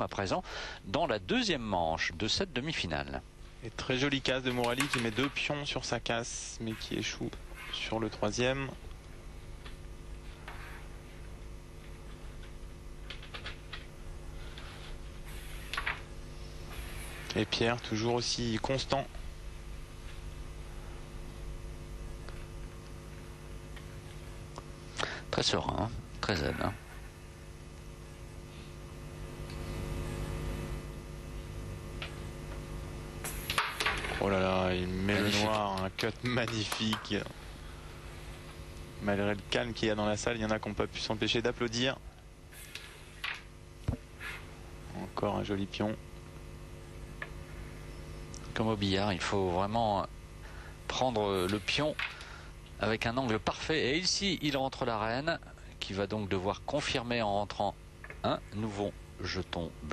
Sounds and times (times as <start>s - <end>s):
Speech: 0.0s - 8.8s, 17.3s - 19.2s, 25.3s - 26.8s, 34.2s - 37.4s, 39.0s - 42.0s, 44.9s - 46.0s, 48.5s - 50.1s, 50.9s - 52.0s, 52.8s - 59.9s.